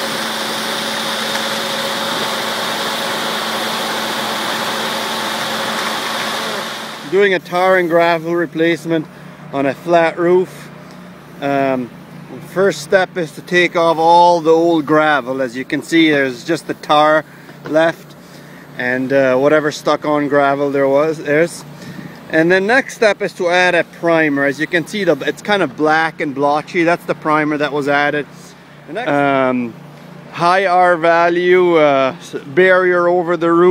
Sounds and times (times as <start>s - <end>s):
Speech: 7.1s - 10.7s, 11.4s - 18.1s, 18.8s - 21.7s, 22.3s - 33.7s.